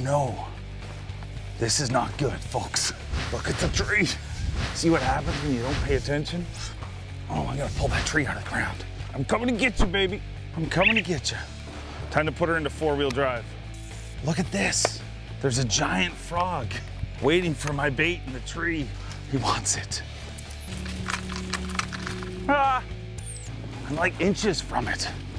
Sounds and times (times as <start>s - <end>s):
Music: 0.0s - 25.3s
Speech: 1.6s - 4.2s, 4.8s - 6.7s, 7.3s - 11.5s, 14.2s - 20.0s, 23.8s - 25.2s.